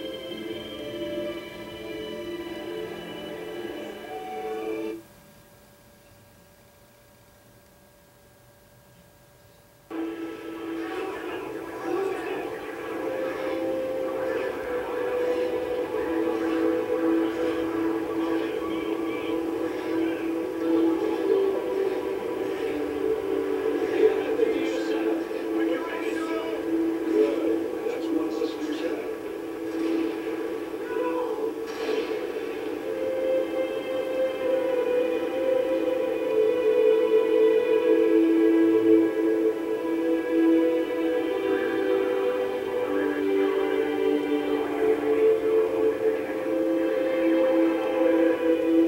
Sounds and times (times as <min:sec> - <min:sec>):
Television: 0:00.0 - 0:48.8.